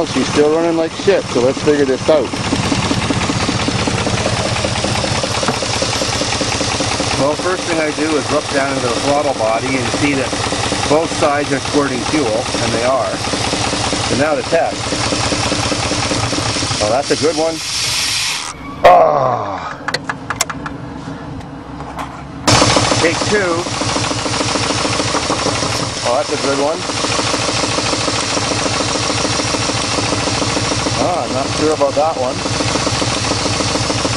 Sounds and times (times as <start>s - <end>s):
Speech: 0.0s - 2.3s, 14.1s - 14.8s, 16.8s - 17.6s, 26.0s - 26.8s, 31.0s - 32.4s.